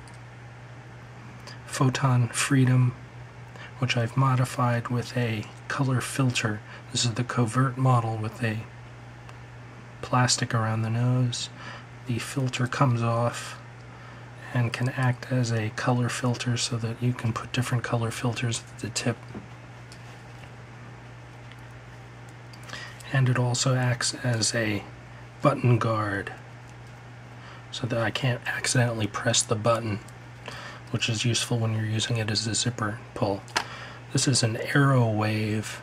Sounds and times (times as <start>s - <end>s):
Speech: 1.6s - 3.0s, 3.8s - 8.7s, 10.0s - 13.7s, 14.4s - 19.4s, 23.0s - 26.4s, 27.7s - 30.1s, 30.9s - 33.5s, 34.1s - 35.8s.